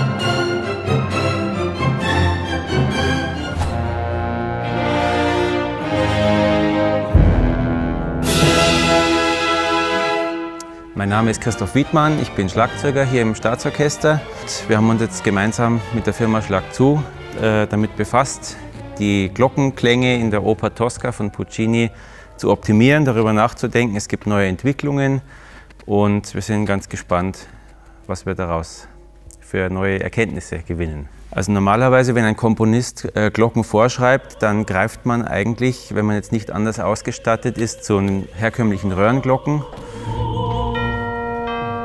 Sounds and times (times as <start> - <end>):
Music: 0.0 - 41.8
Speech: 11.0 - 25.2, 25.9 - 27.5, 28.1 - 39.7.